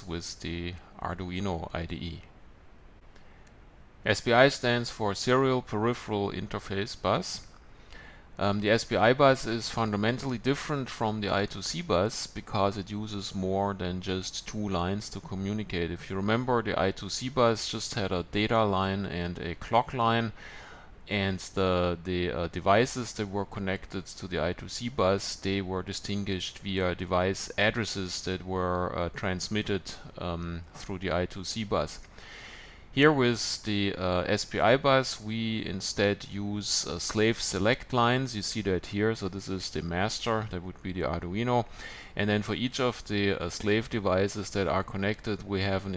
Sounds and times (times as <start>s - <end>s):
Speech: 0.0s - 2.3s, 4.0s - 7.5s, 8.4s - 20.4s, 21.1s - 32.0s, 33.0s - 45.9s.